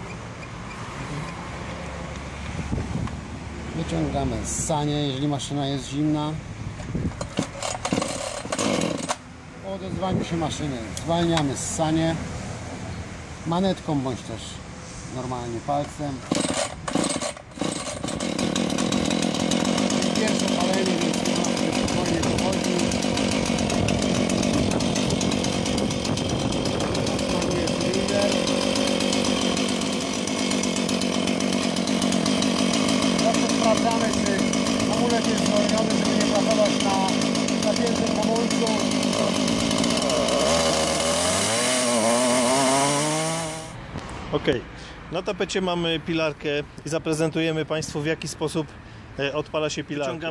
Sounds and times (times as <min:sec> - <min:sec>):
Speech: 0:03.8 - 0:06.4, 0:09.6 - 0:12.2, 0:13.5 - 0:16.2, 0:20.1 - 0:23.0, 0:27.2 - 0:28.4, 0:33.2 - 0:39.3, 0:44.3 - 0:50.3
Chainsaw: 0:07.2 - 0:09.2, 0:16.2 - 0:43.8.